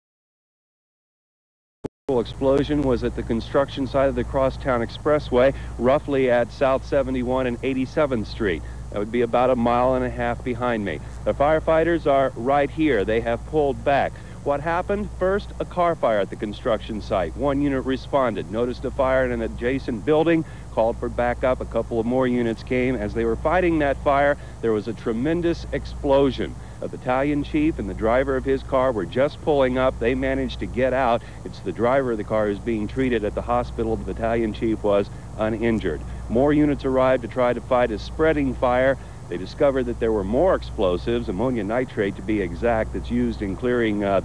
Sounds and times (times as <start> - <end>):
Speech: 2.1 - 44.2.